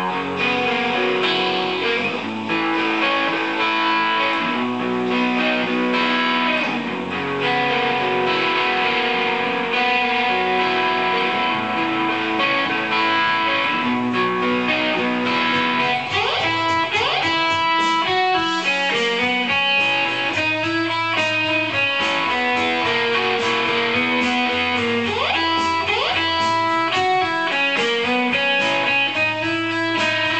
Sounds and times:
Guitar: 0.0s - 30.3s.

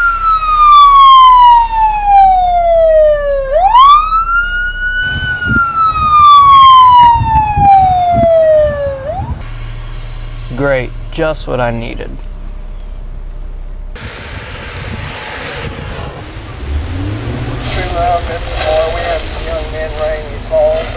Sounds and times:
Police car (siren): 0.0s - 9.4s.

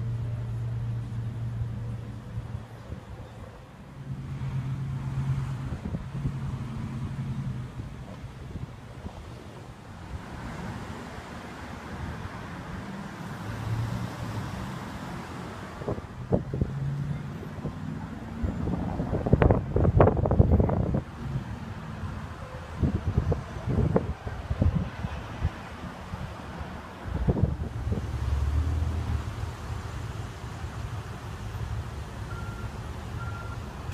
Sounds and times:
Vehicle: 0.0s - 33.9s.

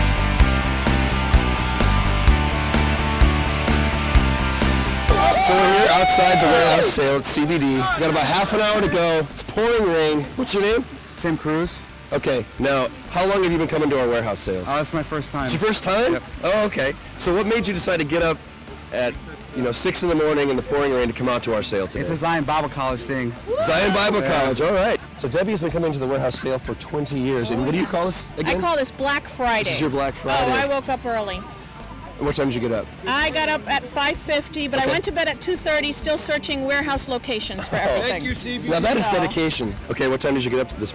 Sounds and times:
Music: 0.0s - 40.9s.

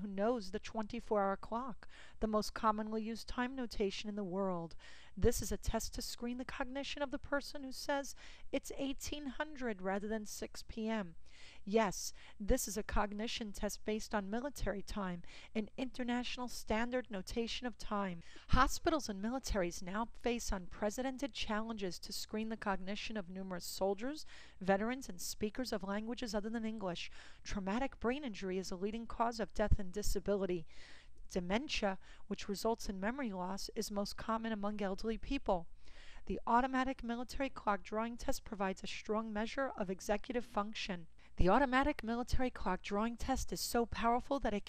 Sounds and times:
Speech: 0.0s - 30.7s, 31.3s - 35.6s, 36.3s - 44.6s.

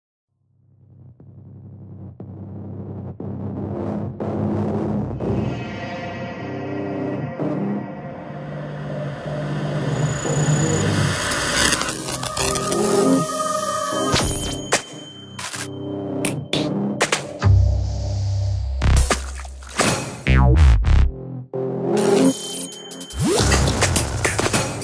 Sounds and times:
Music: 0.4s - 24.8s.

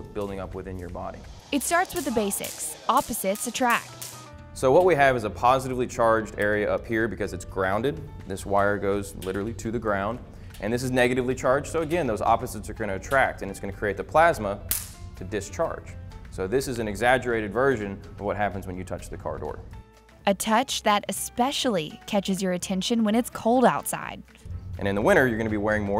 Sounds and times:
Music: 0.0s - 25.9s.

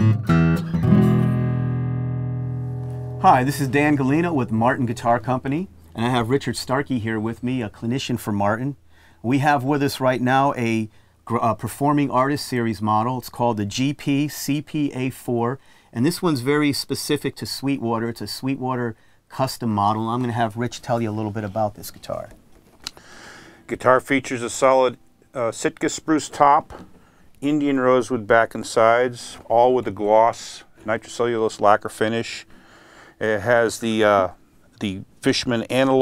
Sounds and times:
Music: 0.0s - 3.7s
Speech: 3.2s - 22.4s, 23.7s - 26.8s, 27.4s - 32.5s, 33.2s - 36.0s.

